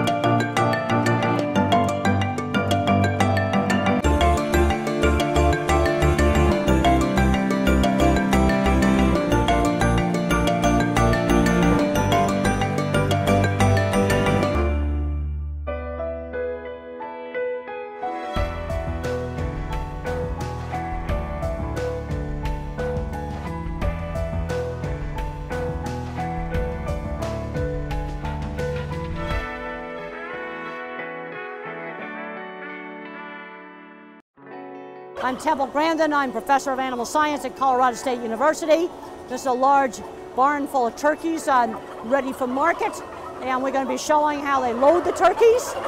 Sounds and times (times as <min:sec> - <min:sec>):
Music: 0:00.0 - 0:45.8.